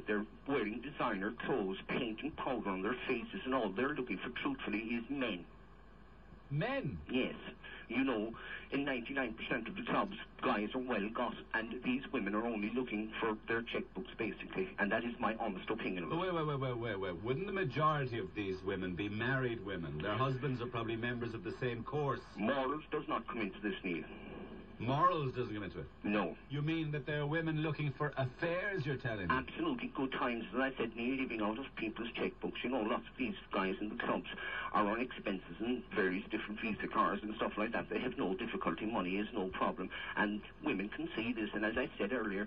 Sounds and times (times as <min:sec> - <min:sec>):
Speech: 0:00.0 - 0:05.5, 0:06.5 - 0:42.4.